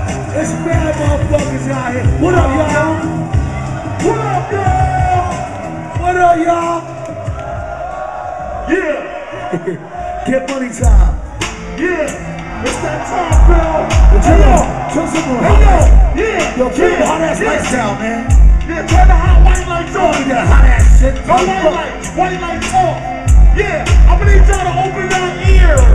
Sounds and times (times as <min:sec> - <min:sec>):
Music: 0:00.0 - 0:25.9
Speech: 0:10.2 - 0:11.1.